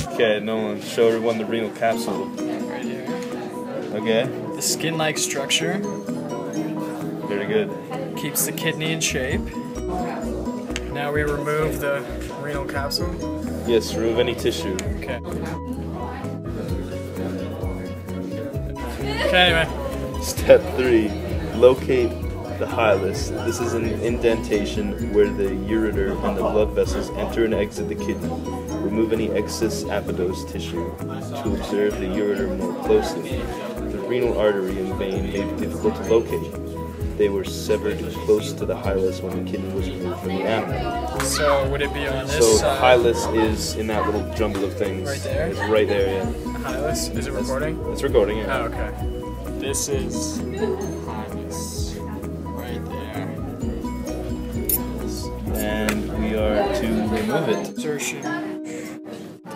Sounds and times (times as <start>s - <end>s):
Music: 0.0s - 59.5s.